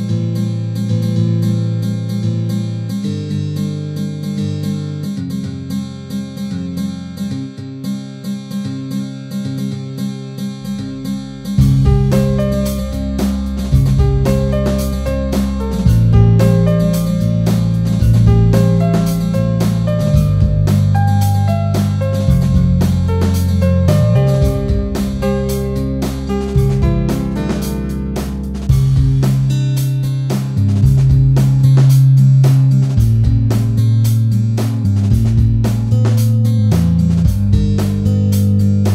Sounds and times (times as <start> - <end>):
Music: 0.0 - 38.9.